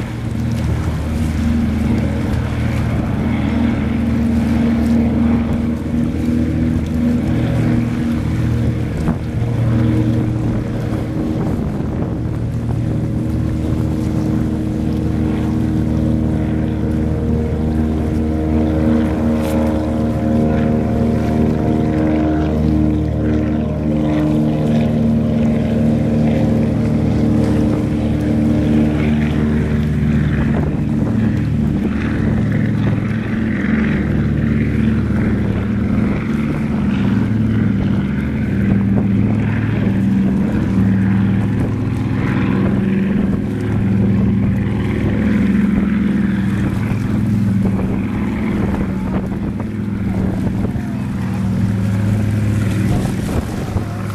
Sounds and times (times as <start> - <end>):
Motorboat, speedboat: 0.0 - 54.1.